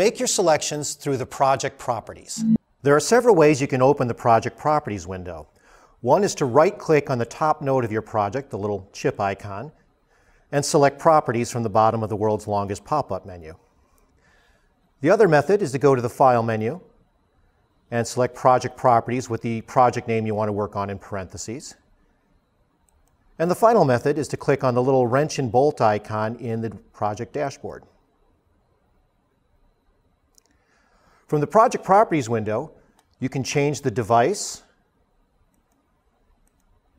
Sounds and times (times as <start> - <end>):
Speech: 0.0 - 9.8, 10.5 - 13.6, 15.0 - 16.9, 17.9 - 21.8, 23.4 - 27.9, 31.3 - 34.7.